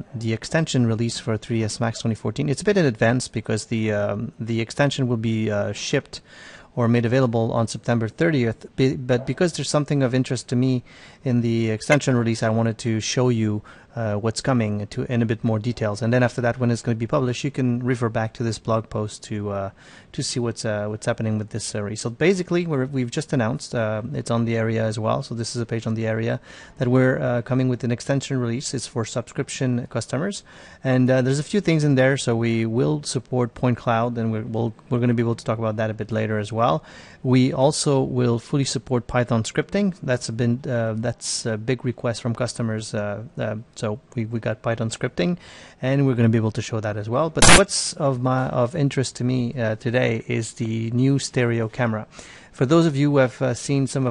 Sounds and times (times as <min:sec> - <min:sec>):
Speech: 0:00.0 - 0:54.1.